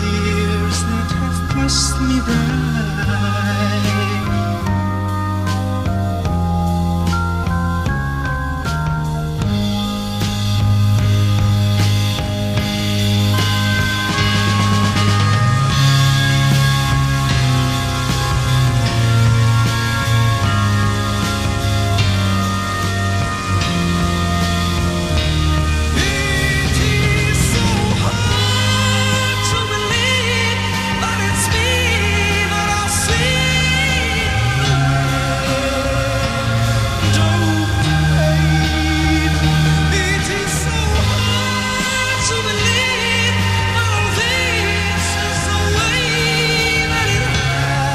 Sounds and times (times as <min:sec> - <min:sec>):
Music: 0:00.0 - 0:47.9.